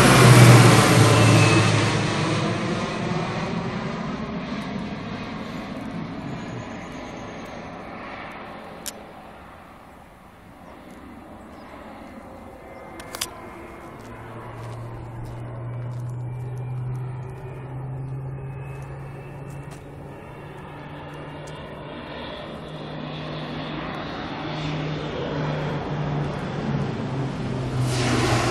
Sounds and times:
Aircraft engine: 0.0 - 28.5
Outside, urban or manmade: 0.0 - 28.5.

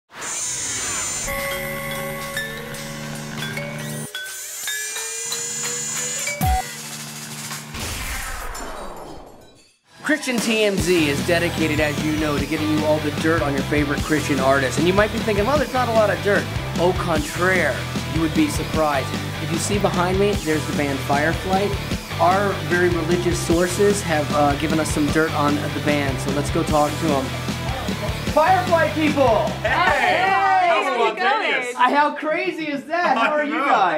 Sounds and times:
Music: 0.7 - 30.8.

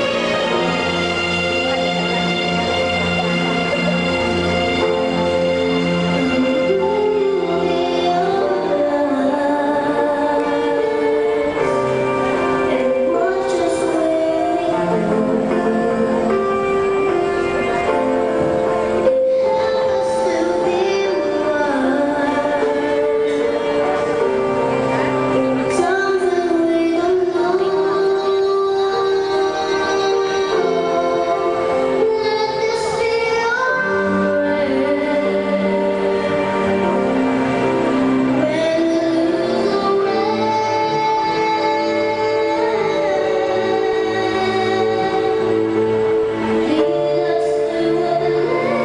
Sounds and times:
Music: 0.0 - 48.8.

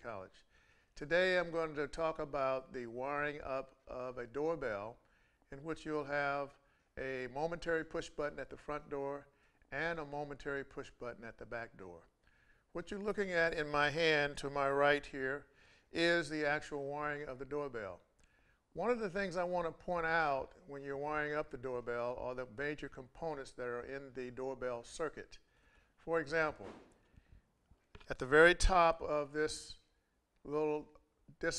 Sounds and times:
Speech: 0.0 - 12.1, 12.7 - 18.1, 18.8 - 25.4, 26.0 - 26.7, 28.0 - 31.5.

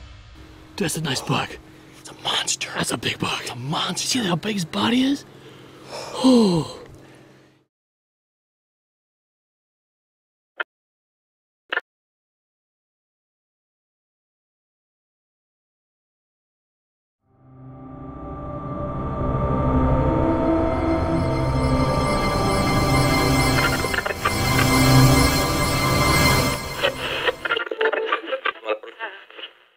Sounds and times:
Speech: 0.8 - 5.3, 27.9 - 29.5
Music: 17.3 - 28.2.

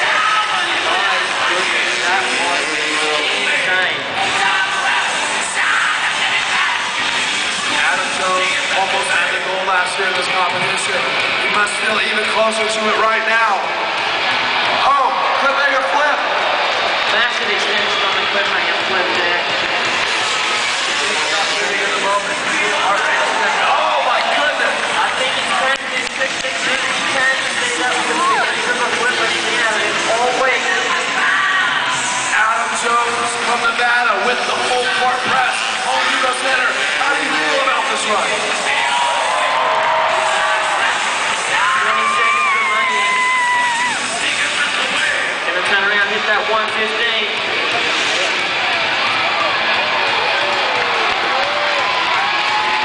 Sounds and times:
Speech: 0.0 - 6.9, 7.6 - 13.7, 14.8 - 16.3, 17.1 - 19.6, 20.9 - 31.7, 32.3 - 39.0, 44.1 - 48.6.

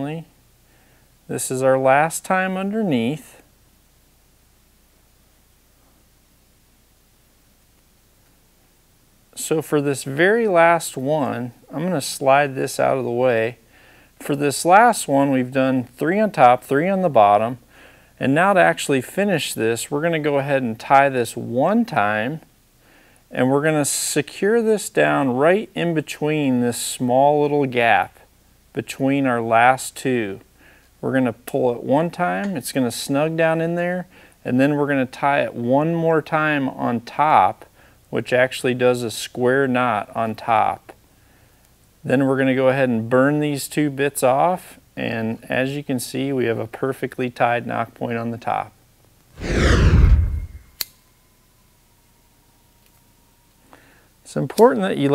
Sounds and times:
Whoosh, swoosh, swish: 49.4 - 50.8.

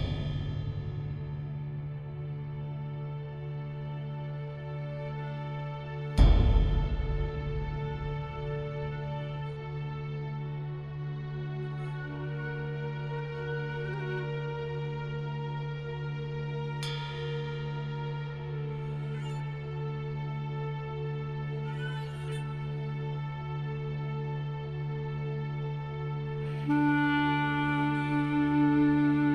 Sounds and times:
Music: 0.0 - 29.3.

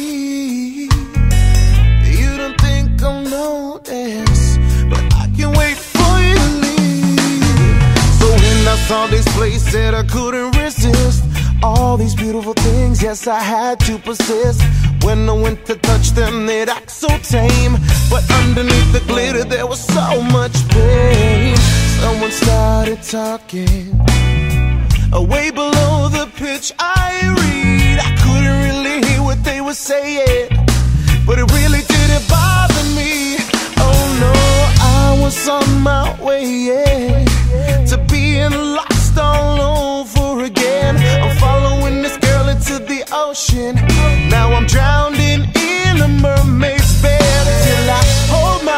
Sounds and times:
Reggae: 0.0 - 48.7.

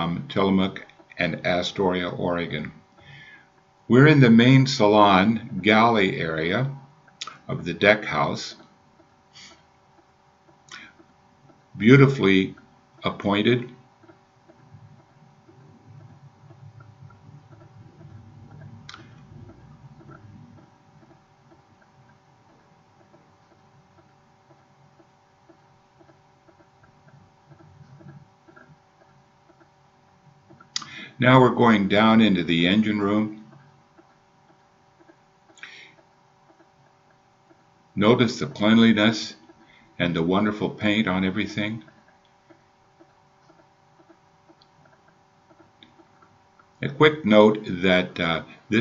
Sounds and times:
Speech: 0.0 - 2.8, 3.9 - 8.6, 11.8 - 13.8, 30.8 - 33.4, 38.0 - 39.4, 40.0 - 41.9, 46.8 - 48.8.

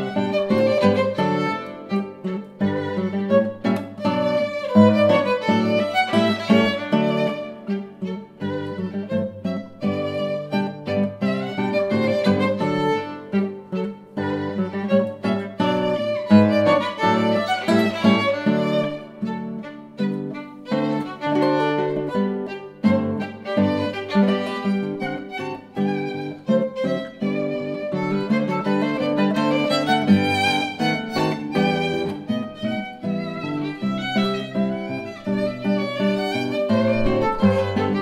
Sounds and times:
Acoustic guitar: 0.0 - 38.0
Strum: 0.0 - 38.0
Violin, fiddle: 0.0 - 38.0.

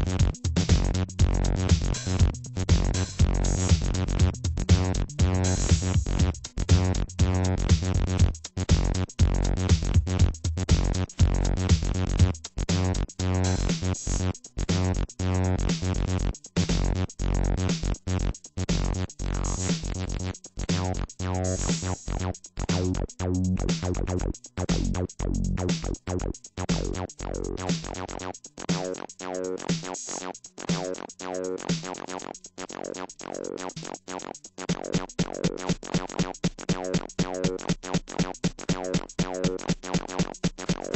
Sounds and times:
Synthesizer: 0.0 - 40.9.

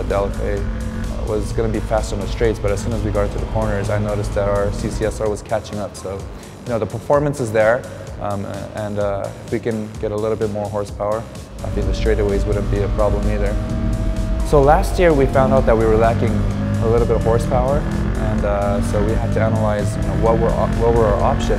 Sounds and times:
Speech: 0.0 - 13.6, 14.5 - 21.5
Music: 0.0 - 21.5.

